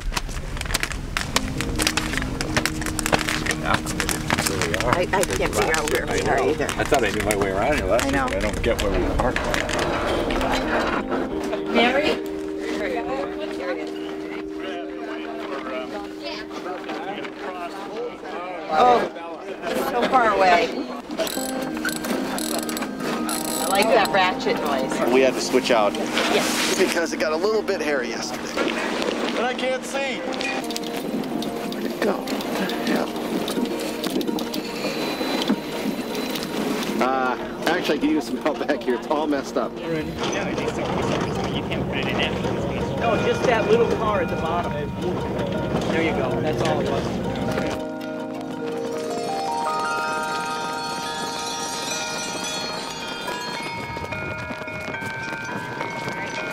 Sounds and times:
Music: 1.4 - 56.5.

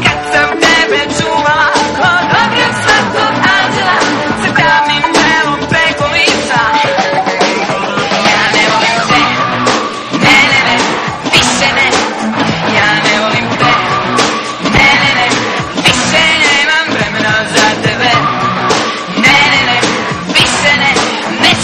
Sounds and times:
Singing: 0.0 - 14.0, 14.6 - 18.4, 19.0 - 21.6
Music: 0.0 - 21.6.

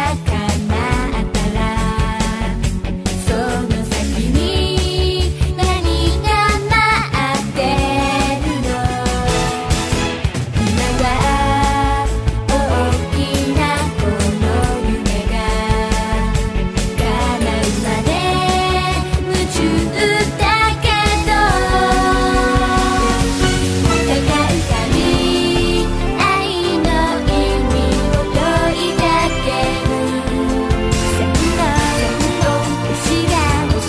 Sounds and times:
Song: 8.6 - 33.7.

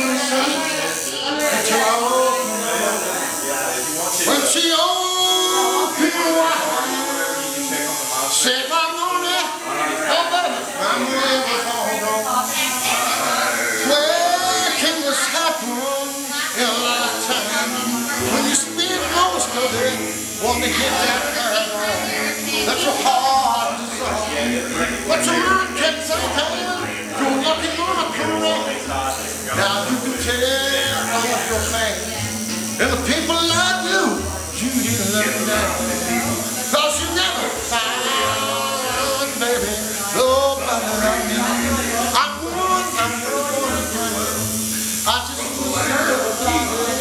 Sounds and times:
Male singing: 0.0 - 32.2, 32.8 - 47.0
Speech: 0.0 - 47.0.

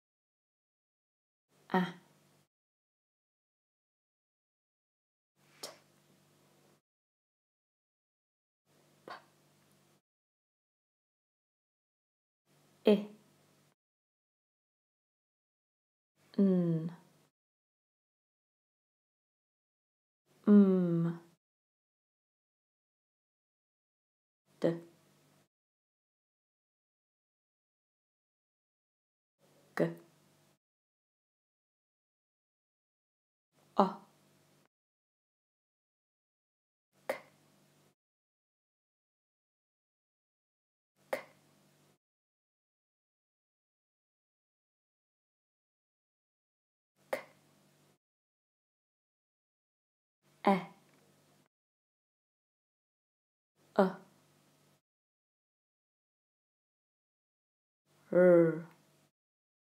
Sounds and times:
Speech: 1.7 - 2.1, 12.9 - 13.2, 16.4 - 17.1, 20.4 - 21.3, 24.6 - 24.9, 29.8 - 30.1, 33.8 - 34.1, 50.5 - 50.8, 53.8 - 54.1, 58.1 - 58.8.

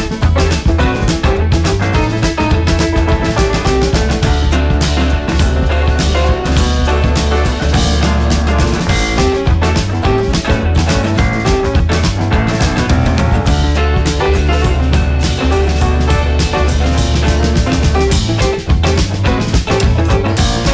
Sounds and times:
Music: 0.0 - 20.7.

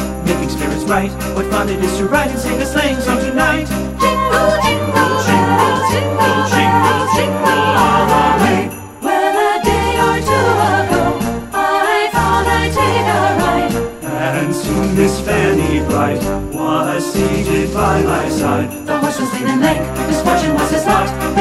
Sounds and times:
Jingle, tinkle: 0.0 - 21.4.

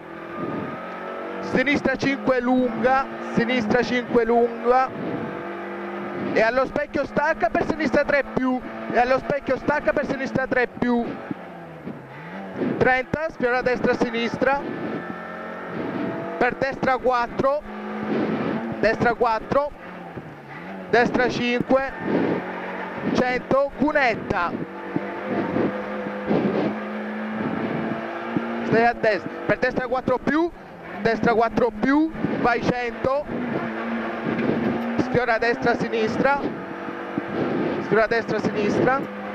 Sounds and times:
Car: 0.0 - 39.3
Speech: 1.5 - 4.9, 6.4 - 11.2, 12.8 - 14.6, 16.4 - 17.7, 18.8 - 19.8, 21.0 - 22.0, 23.2 - 24.6, 28.7 - 33.3, 35.0 - 36.5, 37.8 - 39.1.

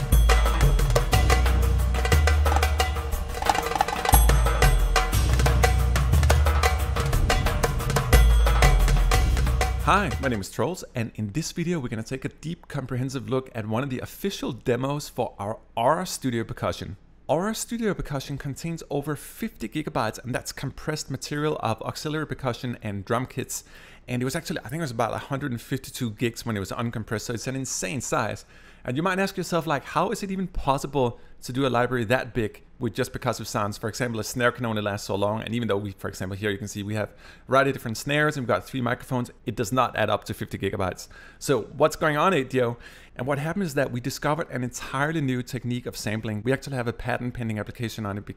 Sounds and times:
Speech: 9.8 - 48.3.

